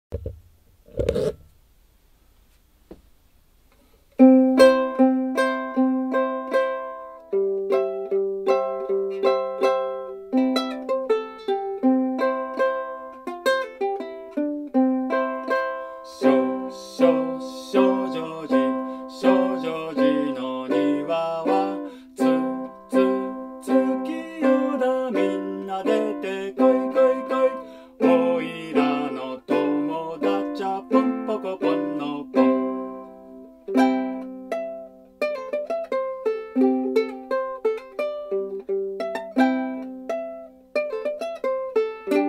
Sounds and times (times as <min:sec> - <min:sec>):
Ukulele: 0:00.1 - 0:01.6, 0:03.8 - 0:42.2.